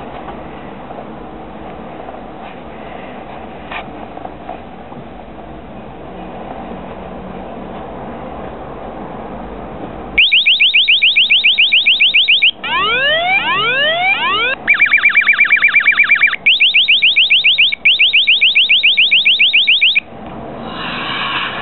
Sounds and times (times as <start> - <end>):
Alarm: 10.2 - 20.1.